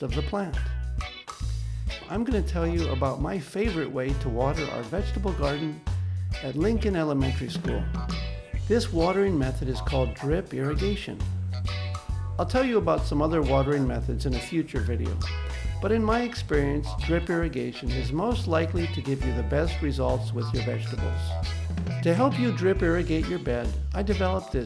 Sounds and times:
Speech: 0:00.0 - 0:00.7, 0:02.1 - 0:05.8, 0:06.4 - 0:07.9, 0:08.7 - 0:11.2, 0:12.4 - 0:15.2, 0:15.8 - 0:21.3, 0:22.0 - 0:24.6
Music: 0:00.0 - 0:24.6.

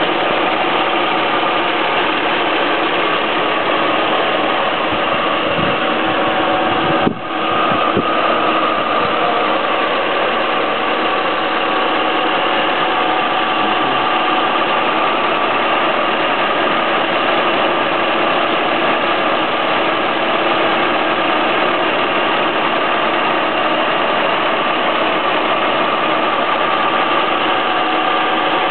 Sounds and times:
Idling: 0:00.0 - 0:28.7
Medium engine (mid frequency): 0:00.0 - 0:28.7
Vehicle: 0:00.0 - 0:28.7.

